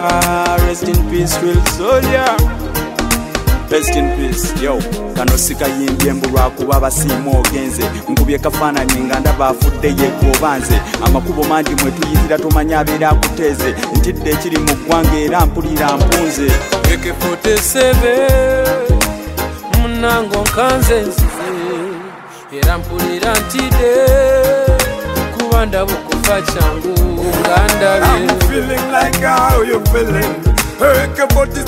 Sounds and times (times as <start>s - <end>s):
Rhythm and blues: 0.0s - 31.6s.